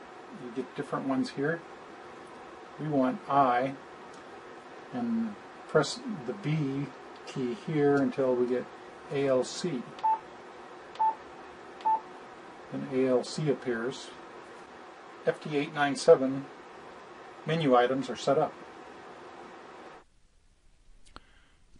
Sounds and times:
Speech: 0.3 - 1.6, 2.8 - 3.8, 4.9 - 10.0, 12.7 - 14.2, 15.2 - 16.5, 17.4 - 18.6.

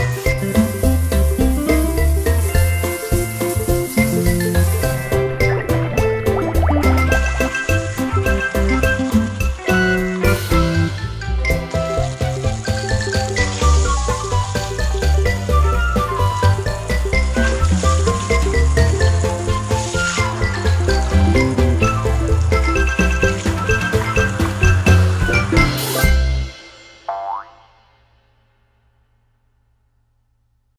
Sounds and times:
Fill (with liquid): 0.0 - 26.2
Music: 0.0 - 30.3.

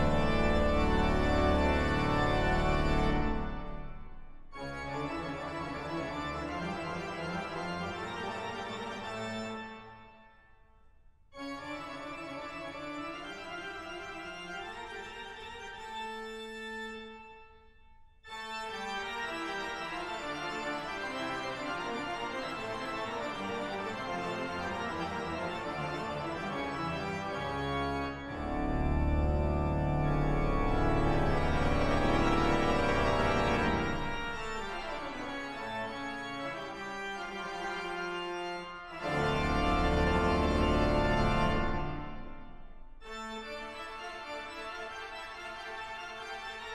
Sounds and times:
Music: 0.0 - 46.7.

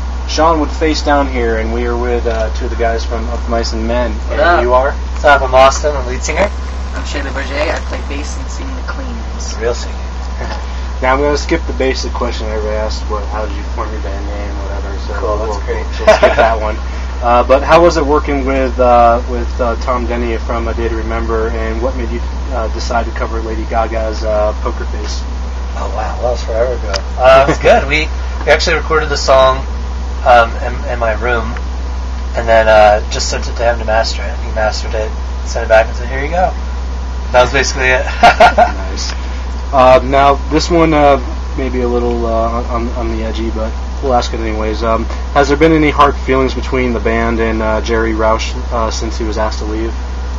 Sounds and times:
Speech: 0.3 - 31.6, 32.3 - 36.6, 37.3 - 50.0.

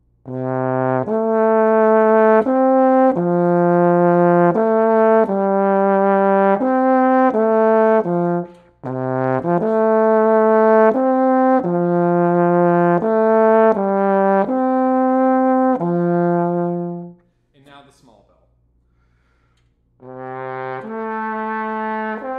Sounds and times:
Music: 0.2 - 17.3, 20.0 - 22.3
Speech: 17.6 - 18.5.

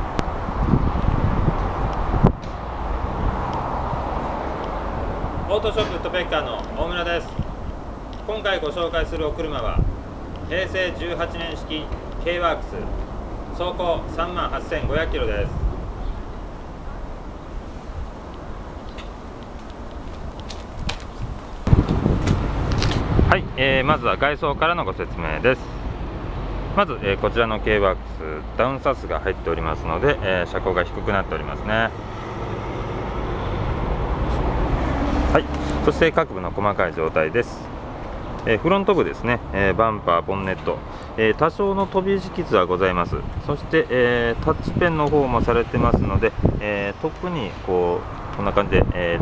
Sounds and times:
Speech: 5.5 - 7.4, 8.3 - 9.9, 10.5 - 12.9, 13.6 - 15.6, 23.3 - 25.7, 26.8 - 31.9, 35.3 - 37.7, 38.4 - 49.2.

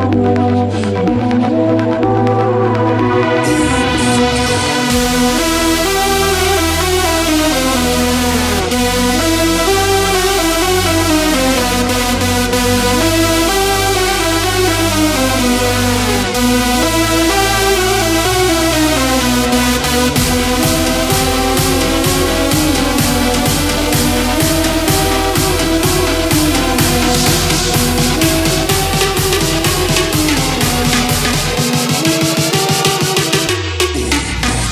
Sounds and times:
Music: 0.0 - 34.7.

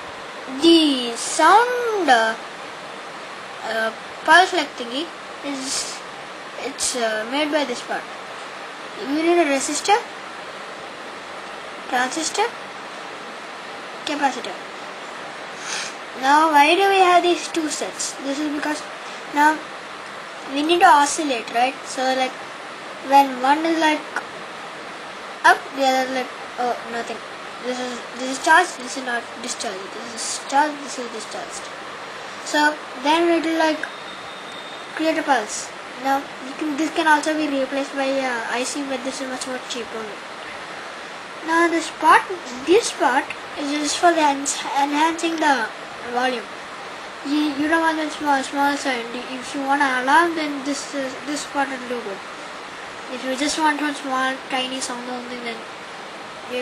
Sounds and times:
Speech: 0.5 - 2.4, 3.6 - 6.0, 6.6 - 8.1, 9.0 - 10.1, 11.9 - 12.6, 14.1 - 14.6, 16.2 - 19.6, 20.5 - 22.4, 23.0 - 24.2, 25.4 - 31.7, 32.4 - 33.9, 35.0 - 40.2, 41.4 - 46.5, 47.2 - 52.2, 53.1 - 55.6.

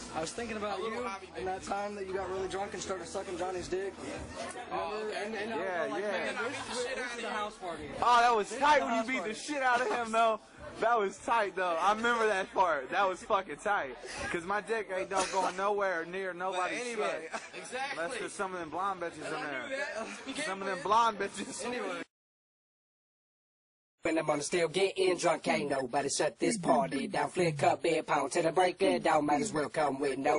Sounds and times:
Speech: 0.0 - 22.1, 24.1 - 30.3.

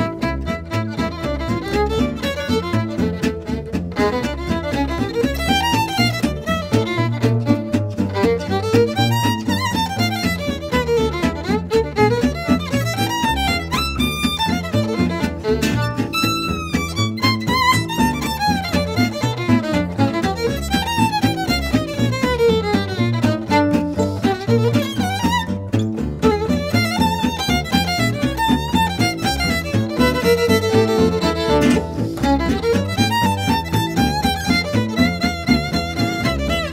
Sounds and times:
Violin, fiddle: 0.0 - 36.7.

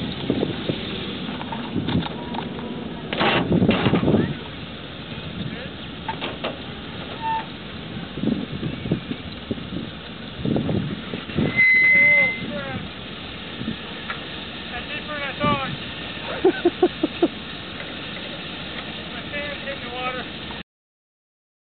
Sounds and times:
Speech: 5.4 - 5.8, 11.9 - 12.9, 14.6 - 15.8, 19.0 - 20.3.

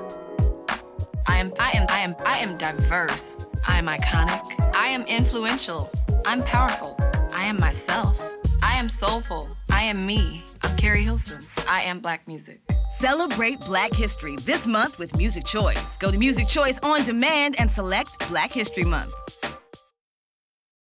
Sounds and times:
Music: 0.0 - 20.0
Speech: 1.3 - 19.2.

